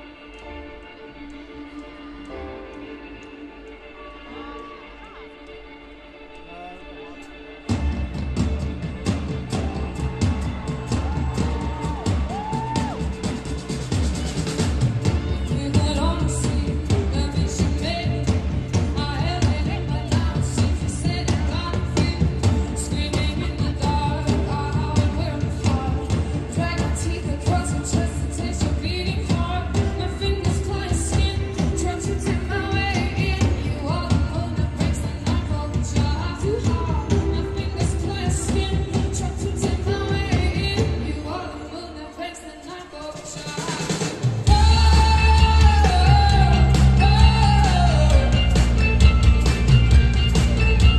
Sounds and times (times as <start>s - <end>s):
Music: 0.0s - 50.9s.